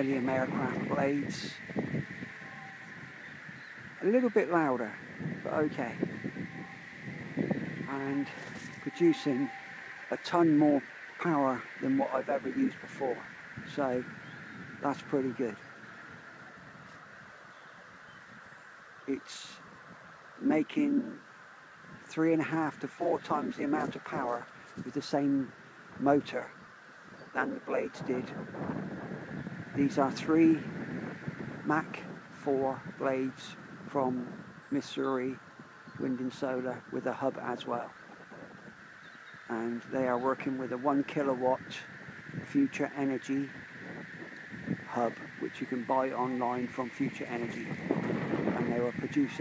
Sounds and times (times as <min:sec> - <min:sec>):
Speech: 0:00.0 - 0:01.6, 0:04.0 - 0:06.0, 0:07.9 - 0:09.5, 0:10.1 - 0:14.1, 0:14.8 - 0:15.6, 0:19.1 - 0:19.6, 0:20.4 - 0:21.2, 0:22.1 - 0:26.6, 0:27.4 - 0:28.4, 0:29.8 - 0:30.7, 0:31.7 - 0:35.4, 0:36.0 - 0:37.9, 0:39.5 - 0:41.9, 0:42.5 - 0:43.5, 0:44.9 - 0:47.7, 0:48.6 - 0:49.4
Rustling leaves: 0:00.0 - 0:49.4.